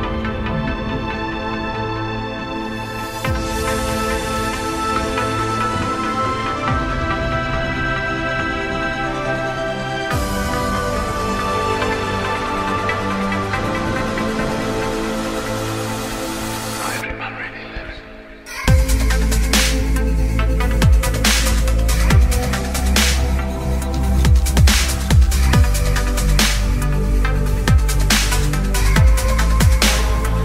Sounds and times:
Music: 0.0 - 30.4
Speech: 16.8 - 18.8.

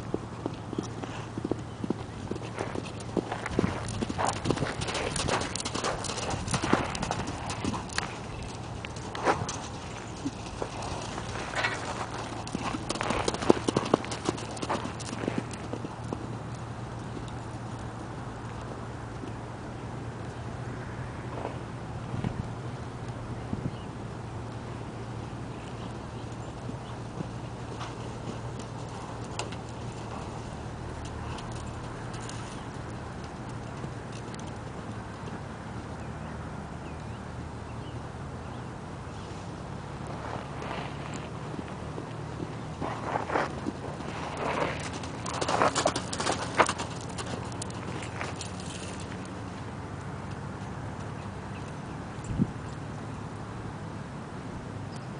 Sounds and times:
Clip-clop: 0.0 - 55.1.

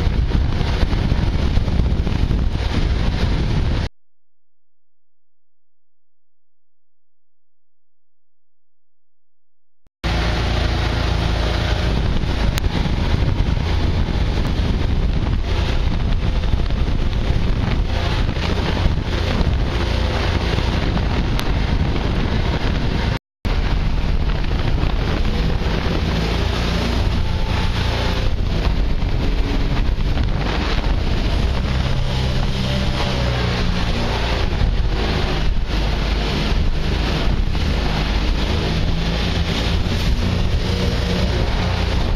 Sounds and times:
Boat, Water vehicle: 0.0 - 3.9, 10.0 - 42.1.

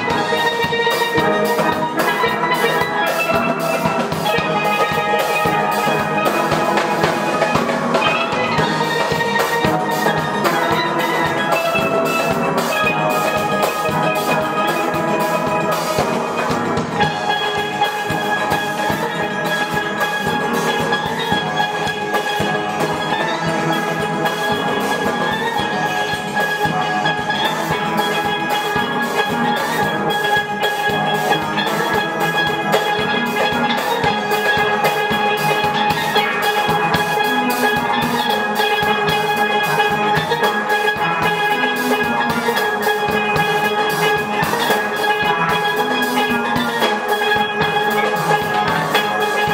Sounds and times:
Steelpan: 0.0 - 49.5.

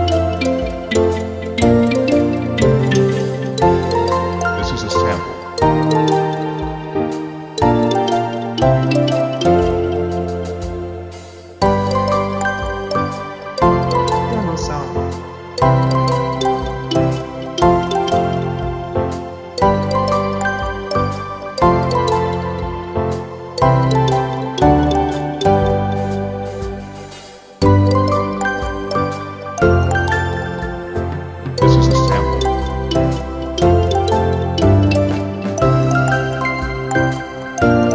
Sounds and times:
Music: 0.0 - 37.9
Speech: 4.6 - 5.4, 14.2 - 15.1, 31.6 - 32.3.

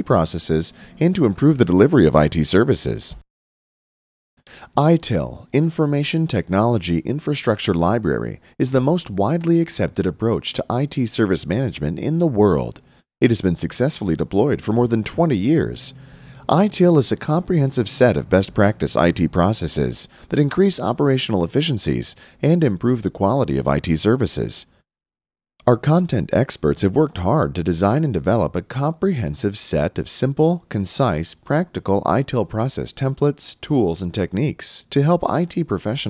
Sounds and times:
Speech: 0.0 - 3.2, 4.6 - 24.8, 25.6 - 36.1.

